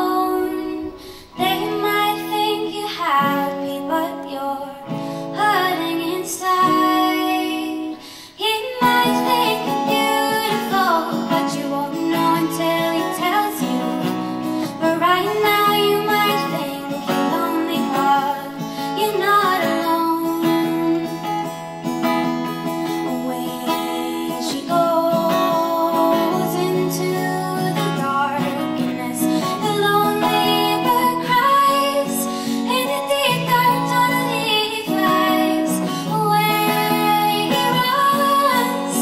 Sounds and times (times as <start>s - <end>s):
Female singing: 0.0s - 21.6s, 22.8s - 39.0s
Music: 0.0s - 39.0s.